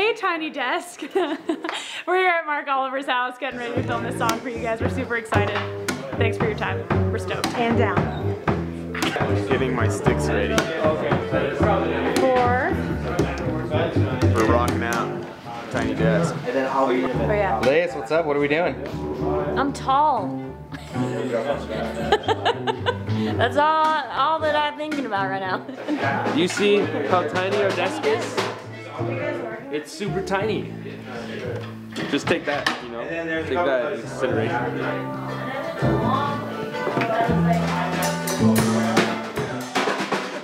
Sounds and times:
Music: 3.1 - 40.4.

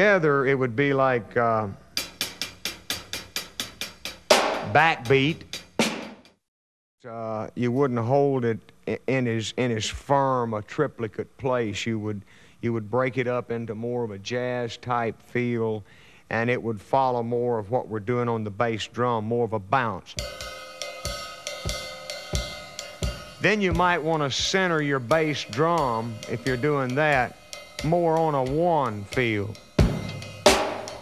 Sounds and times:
Speech: 0.0 - 1.8, 4.7 - 5.4, 7.0 - 20.2, 23.4 - 29.6
Drum: 2.0 - 6.4, 20.2 - 31.0
Drum kit: 2.0 - 6.4, 20.2 - 31.0.

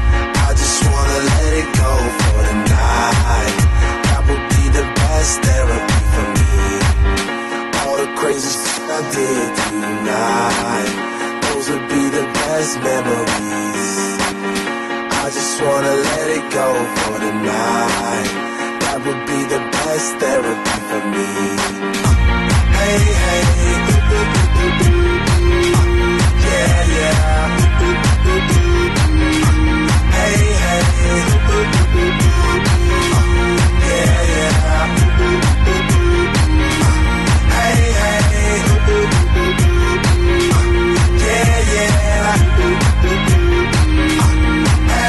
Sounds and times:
Dance music: 0.0 - 45.0.

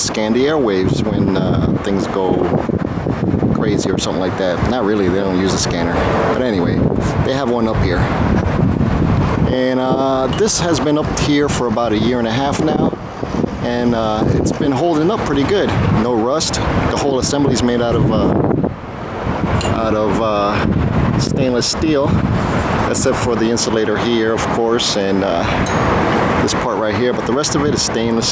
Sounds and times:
Wind: 0.0 - 28.3.

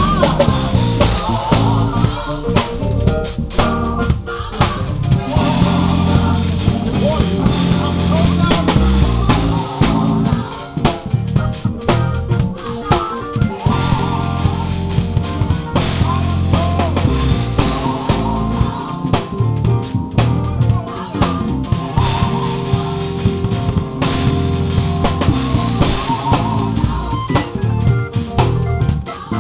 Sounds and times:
Jazz: 0.0 - 29.4
Rhythm and blues: 0.0 - 29.4.

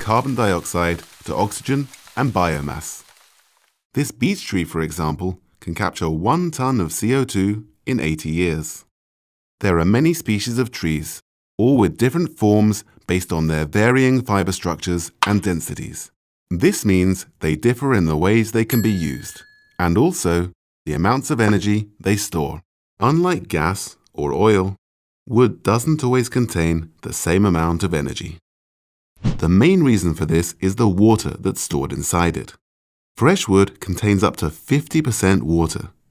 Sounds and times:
Speech: 0.0 - 3.0, 4.0 - 8.9, 9.6 - 28.4, 29.4 - 32.6, 33.2 - 36.0.

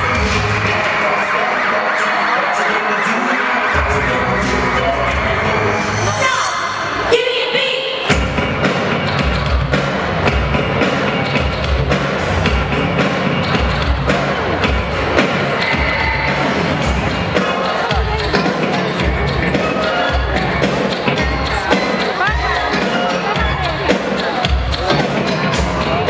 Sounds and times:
Speech: 0.0 - 8.1, 16.8 - 26.0
Music: 0.0 - 26.0.

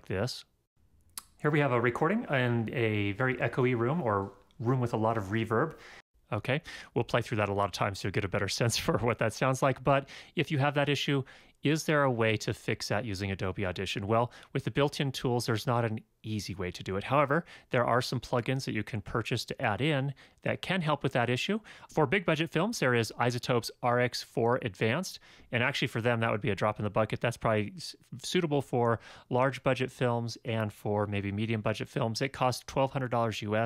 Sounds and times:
Speech: 0.0 - 0.5, 1.2 - 33.6.

